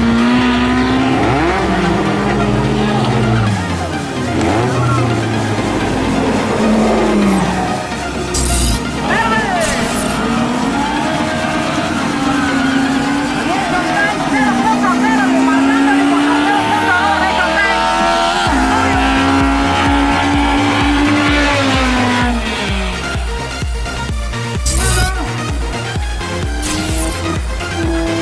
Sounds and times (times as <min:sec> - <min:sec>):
Music: 0:00.0 - 0:28.2
Speech: 0:09.0 - 0:09.8, 0:13.4 - 0:19.8.